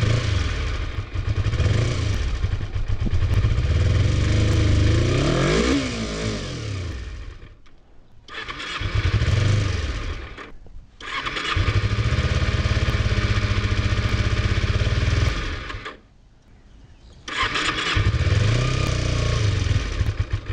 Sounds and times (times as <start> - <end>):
Motorcycle: 0.0 - 16.1, 17.2 - 20.5.